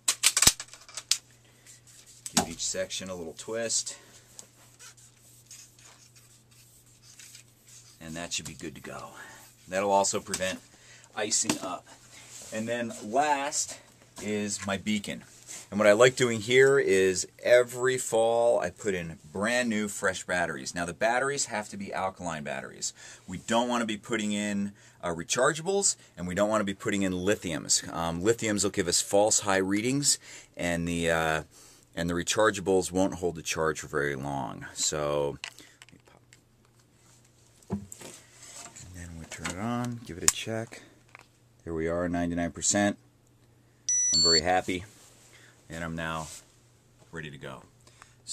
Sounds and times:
Inside, small room: 0:00.0 - 0:48.3
Speech: 0:02.3 - 0:04.0, 0:08.0 - 0:10.6, 0:11.2 - 0:35.4, 0:38.8 - 0:40.9, 0:41.6 - 0:43.0, 0:44.2 - 0:44.9, 0:45.7 - 0:46.4, 0:47.1 - 0:47.7.

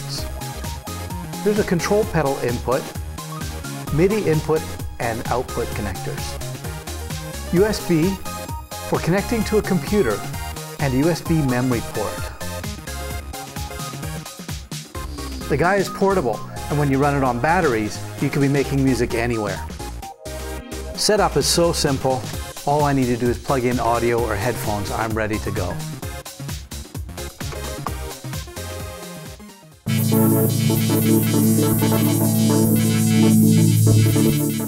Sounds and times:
Speech: 0:00.0 - 0:00.3, 0:01.4 - 0:02.9, 0:03.9 - 0:06.4, 0:07.5 - 0:08.3, 0:08.9 - 0:12.4, 0:15.1 - 0:19.7, 0:21.0 - 0:25.9
Music: 0:00.0 - 0:34.6.

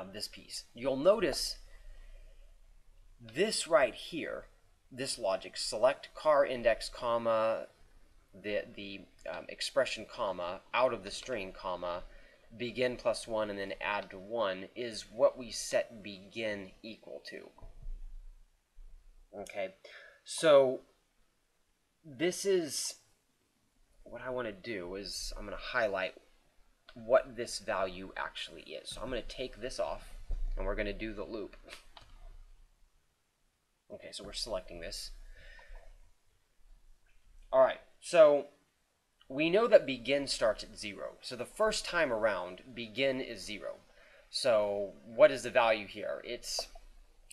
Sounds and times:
Speech: 0:00.0 - 0:01.6, 0:03.2 - 0:07.7, 0:08.4 - 0:17.6, 0:19.4 - 0:20.9, 0:22.1 - 0:23.0, 0:24.1 - 0:26.2, 0:26.9 - 0:31.8, 0:33.9 - 0:35.1, 0:37.5 - 0:38.6, 0:39.3 - 0:46.7.

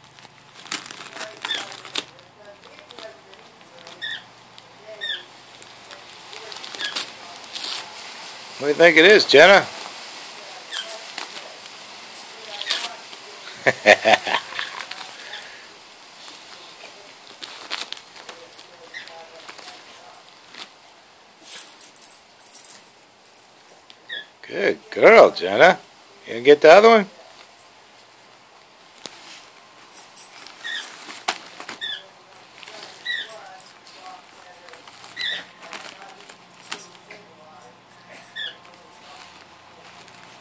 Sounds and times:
Speech: 0:01.2 - 0:09.7, 0:24.4 - 0:27.4.

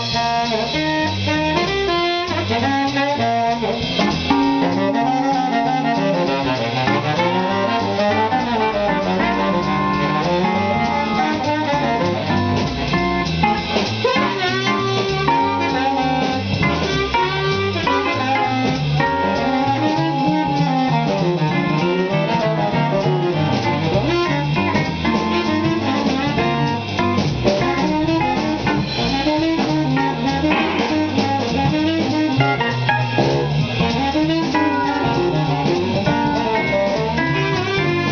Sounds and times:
Jazz: 0:00.0 - 0:38.1.

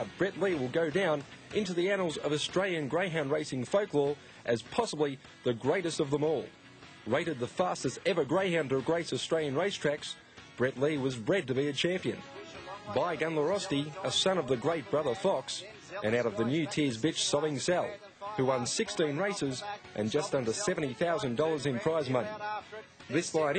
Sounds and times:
Speech: 0:00.0 - 0:06.5, 0:07.1 - 0:23.5
Music: 0:00.0 - 0:23.5.

